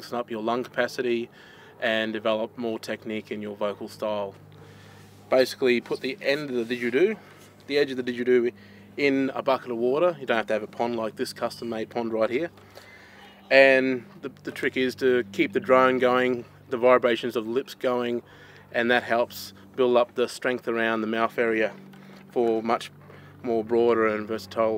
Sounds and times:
Speech: 0.0 - 4.4, 5.3 - 12.5, 13.2 - 24.7.

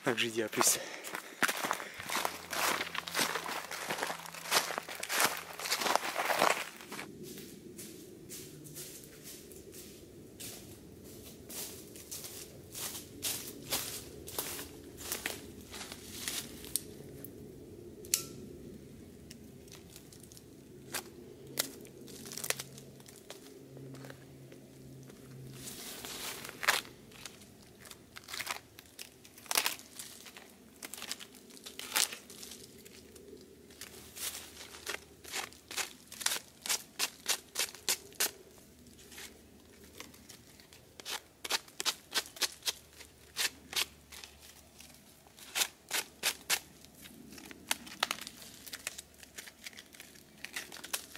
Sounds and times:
Crunch: 0.6 - 7.1, 19.6 - 24.3, 25.3 - 51.1.

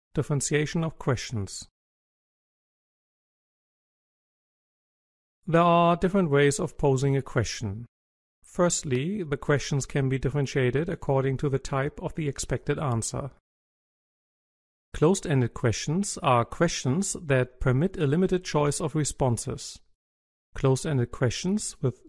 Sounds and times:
Speech: 0.0 - 1.7, 5.5 - 7.9, 8.5 - 13.4, 15.0 - 19.9, 20.6 - 22.0.

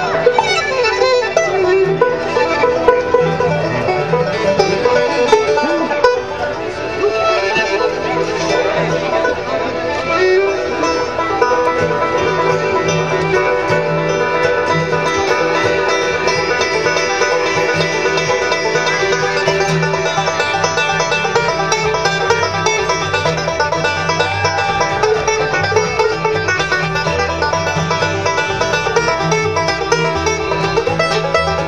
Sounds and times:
Music: 0.0 - 31.6.

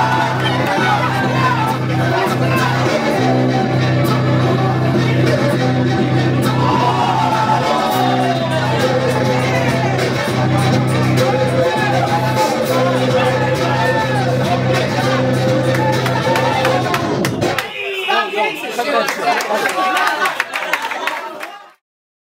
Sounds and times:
Crowd: 0.0 - 21.8.

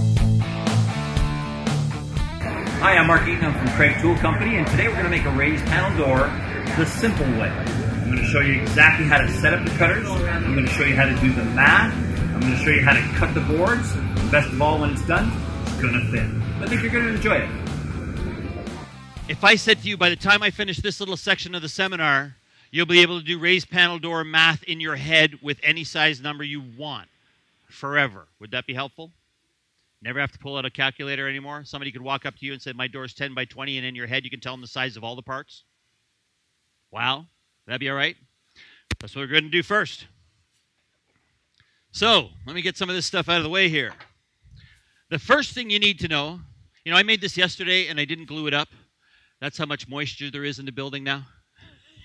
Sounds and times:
Speech: 2.7 - 17.6, 19.3 - 27.1, 27.7 - 29.1, 30.0 - 35.6, 37.0 - 38.2, 39.0 - 40.1, 42.0 - 44.0, 45.1 - 48.7, 49.4 - 51.4.

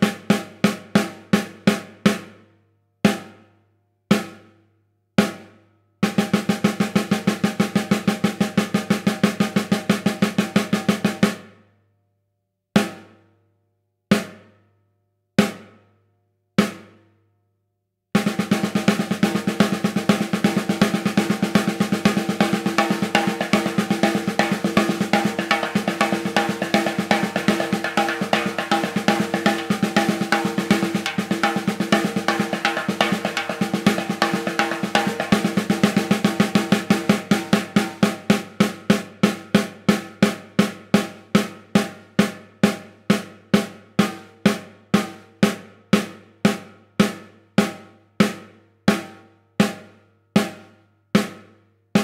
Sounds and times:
Bass drum: 18.2 - 38.8.

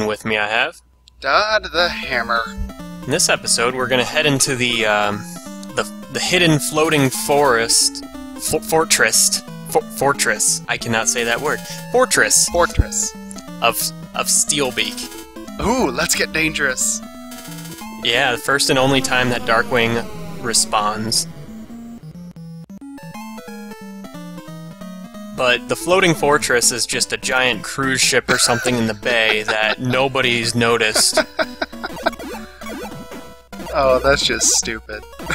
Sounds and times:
Speech: 0.0 - 17.0, 18.0 - 21.3, 25.4 - 32.1, 33.7 - 35.3.

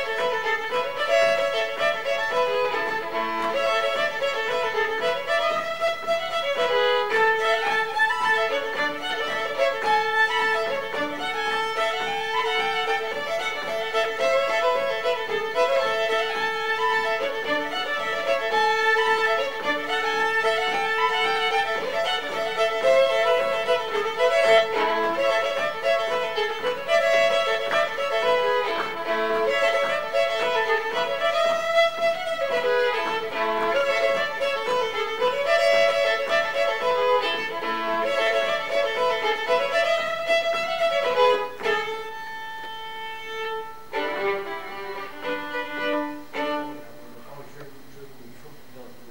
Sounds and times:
Country: 0.0 - 47.7.

